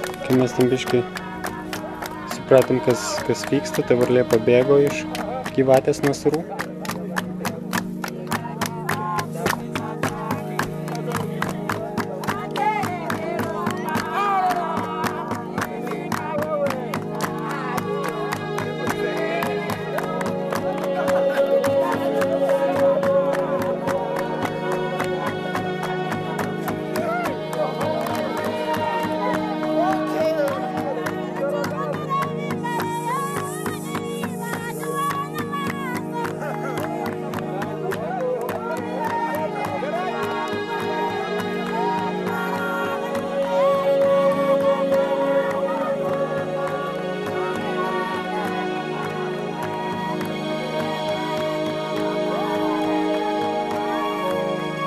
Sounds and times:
Inside, public space: 0.0s - 54.8s
Music: 0.0s - 54.8s
Speech: 2.3s - 7.7s.

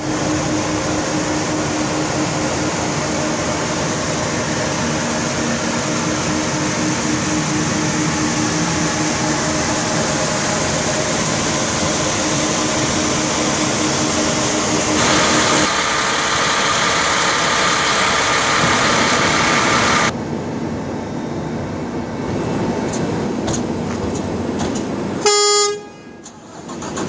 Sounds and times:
Outside, urban or manmade: 0.0s - 27.0s
Truck: 0.0s - 27.0s.

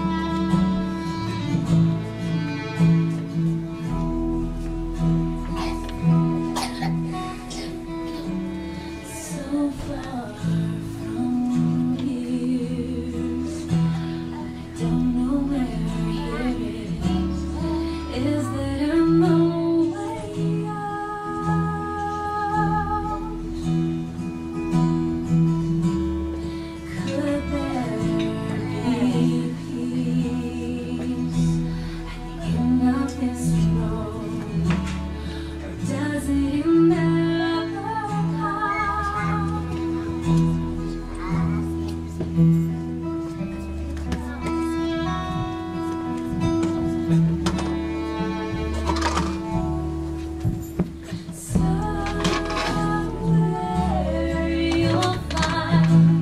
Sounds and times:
Music: 0.0s - 56.2s.

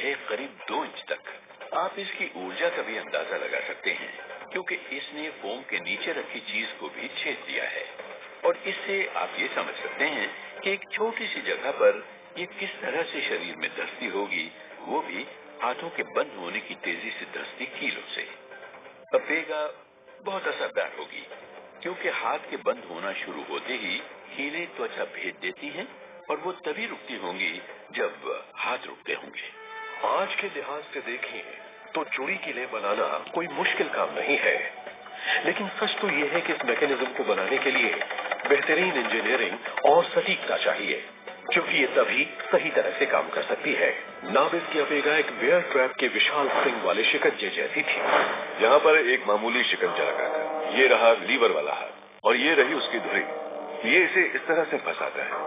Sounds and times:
Speech: 0.0s - 18.4s, 19.1s - 55.4s
Music: 0.0s - 55.4s.

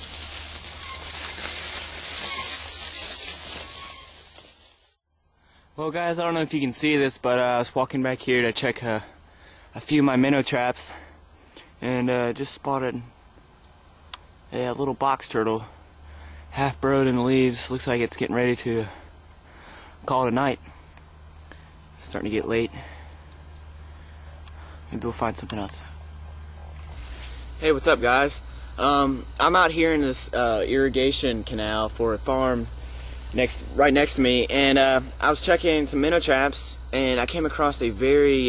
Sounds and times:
Speech: 5.8s - 9.1s, 9.8s - 11.1s, 11.8s - 13.1s, 14.5s - 15.7s, 16.5s - 19.0s, 20.1s - 20.6s, 22.0s - 23.0s, 24.9s - 26.0s, 27.6s - 32.7s, 33.3s - 38.4s.

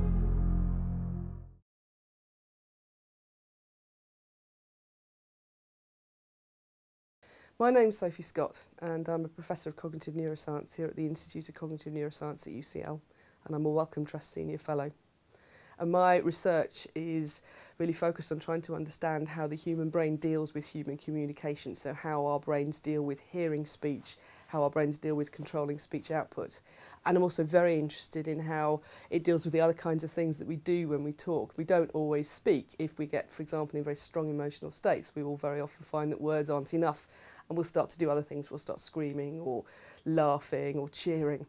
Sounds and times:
Speech: 7.6s - 15.0s, 15.8s - 41.4s.

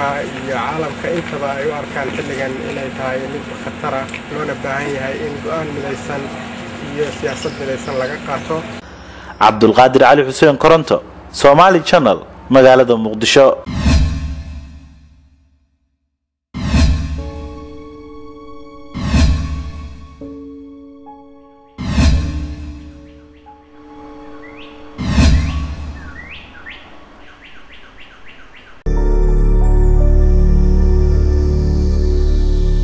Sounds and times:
Music: 17.2s - 25.0s, 28.9s - 32.8s.

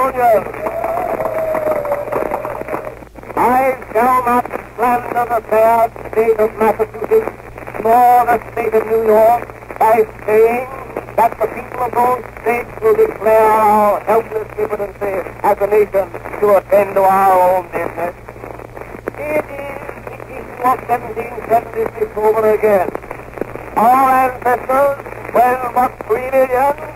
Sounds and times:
Male speech, man speaking: 0.0s - 0.6s, 3.4s - 18.2s, 19.2s - 22.9s, 23.8s - 26.9s
Narration, monologue: 3.0s - 26.9s.

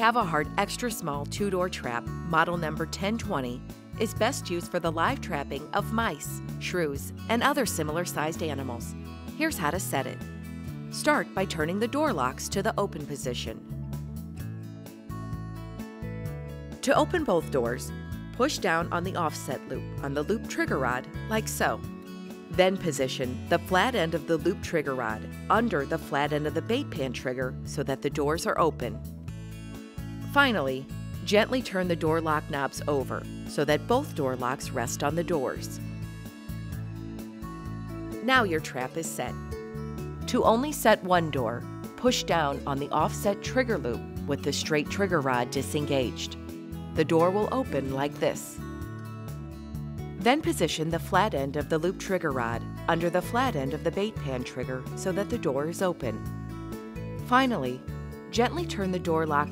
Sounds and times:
Speech: 0.0s - 10.2s, 11.0s - 13.6s, 16.8s - 21.8s, 22.6s - 29.0s, 30.3s - 35.8s, 38.2s - 39.4s, 40.3s - 46.4s, 47.0s - 48.6s, 50.2s - 56.2s, 57.2s - 57.8s, 58.4s - 59.5s
Music: 0.0s - 59.5s.

